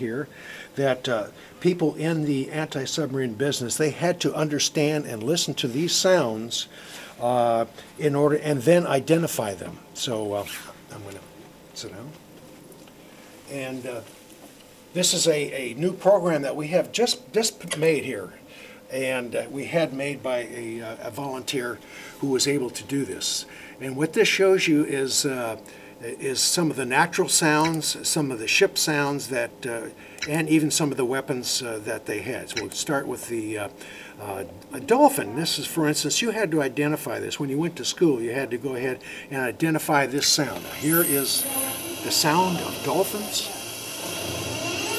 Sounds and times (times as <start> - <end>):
Speech: 0.0 - 12.2, 13.5 - 14.1, 14.9 - 43.7.